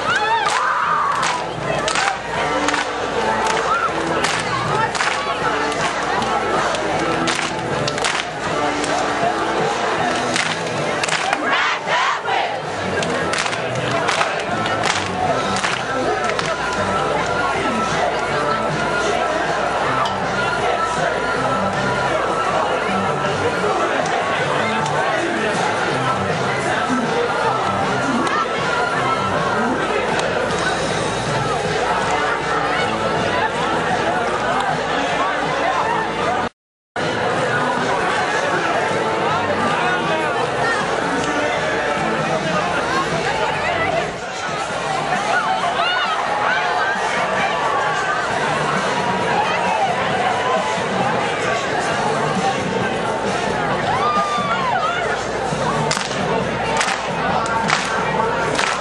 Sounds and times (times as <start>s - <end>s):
Crowd: 0.0s - 58.8s
Music: 0.0s - 58.8s
Speech: 0.0s - 58.8s.